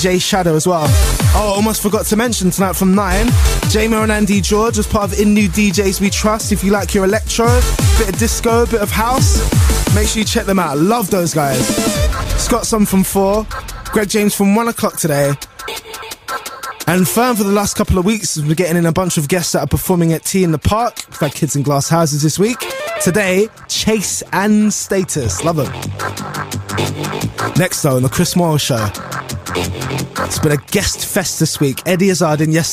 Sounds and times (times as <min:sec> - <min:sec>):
Speech: 0:00.0 - 0:15.4, 0:16.9 - 0:25.8, 0:27.6 - 0:29.0, 0:30.3 - 0:32.7.